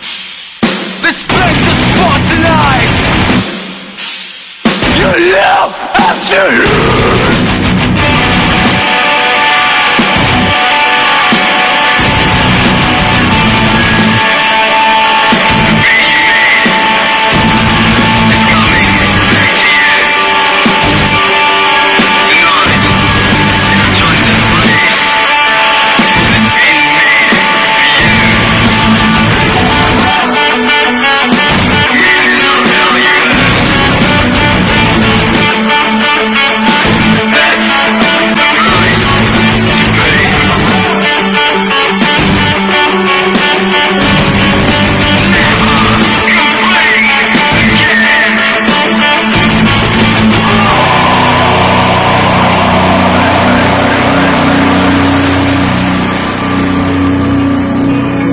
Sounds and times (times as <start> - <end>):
Heavy metal: 0.0 - 58.3.